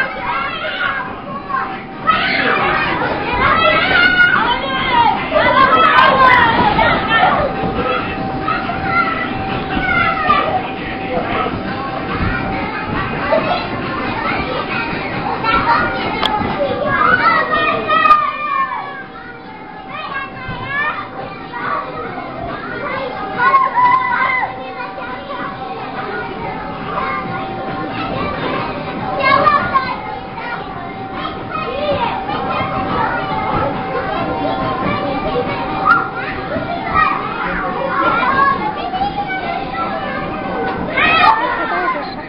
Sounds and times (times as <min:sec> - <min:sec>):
Child speech, kid speaking: 0:00.0 - 0:42.2
Children playing: 0:00.0 - 0:42.2.